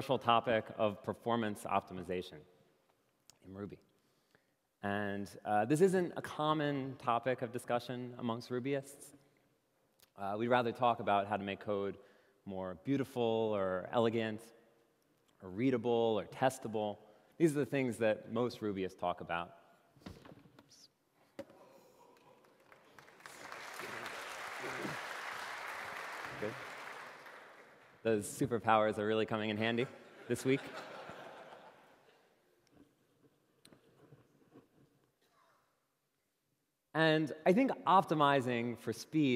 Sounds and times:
Speech: 0:00.0 - 0:02.4, 0:03.4 - 0:03.8, 0:04.8 - 0:09.1, 0:10.1 - 0:14.5, 0:15.4 - 0:19.5, 0:28.1 - 0:30.7, 0:37.0 - 0:39.3.

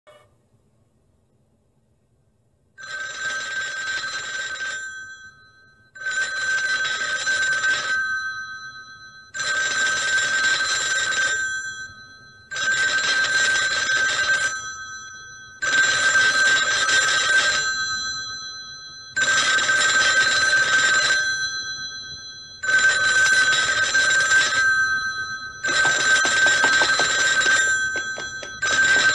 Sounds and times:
Telephone bell ringing: 0:02.8 - 0:29.1.

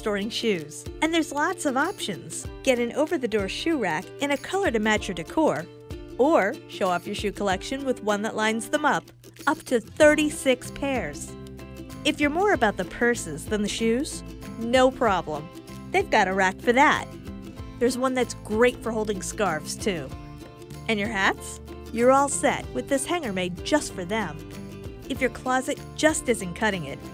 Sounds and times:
Speech: 0:00.0 - 0:05.6, 0:06.2 - 0:11.3, 0:12.1 - 0:17.1, 0:17.8 - 0:20.2, 0:20.9 - 0:24.4, 0:25.1 - 0:27.0
Music: 0:00.0 - 0:27.1.

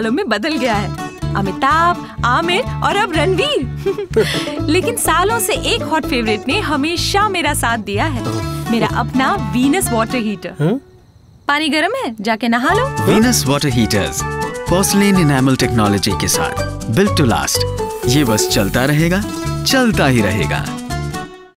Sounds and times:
Music: 0:00.0 - 0:11.0, 0:12.7 - 0:21.5
Speech: 0:11.6 - 0:20.7.

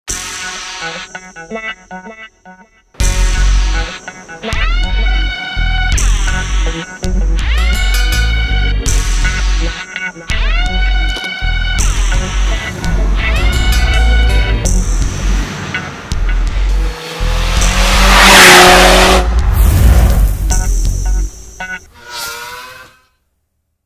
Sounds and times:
Car: 0:10.3 - 0:23.0.

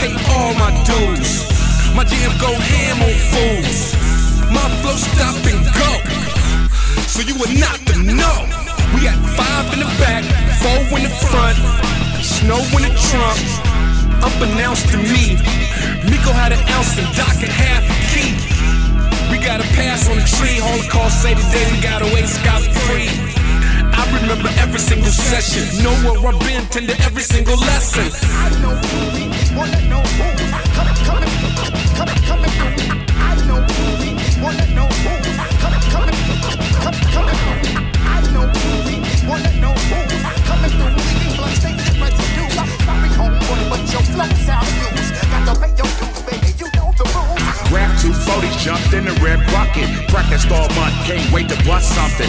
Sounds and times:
Music: 0:00.0 - 0:52.2.

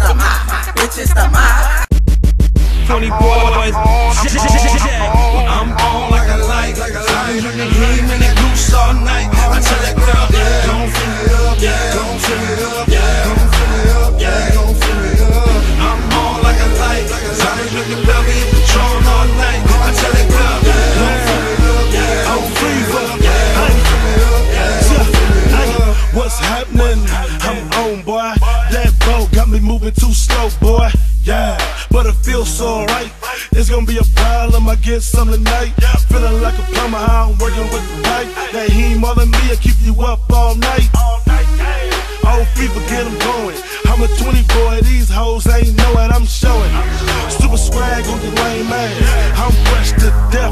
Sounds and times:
Music: 0:00.0 - 0:50.5.

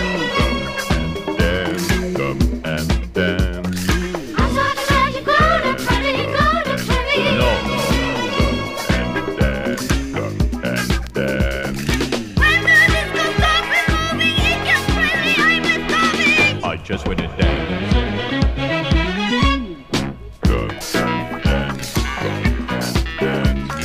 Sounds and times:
Music: 0:00.0 - 0:23.8.

